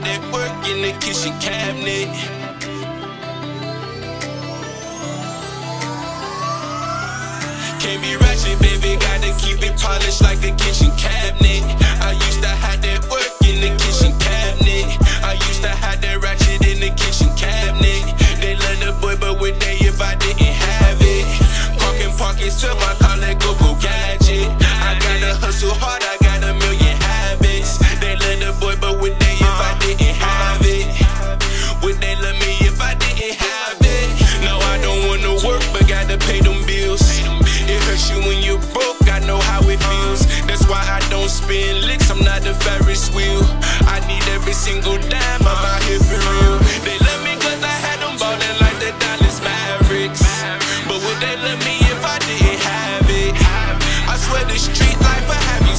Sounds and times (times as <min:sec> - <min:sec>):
Music: 0:00.0 - 0:55.7.